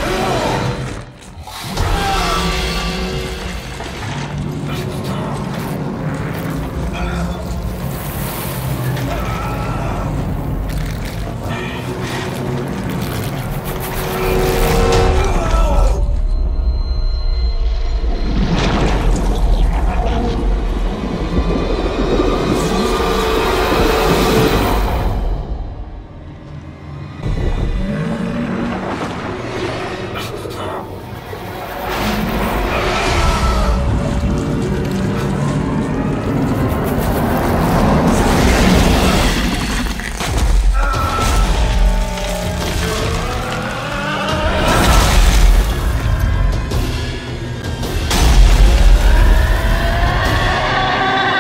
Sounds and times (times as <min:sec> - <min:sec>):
Music: 0:00.0 - 0:51.4.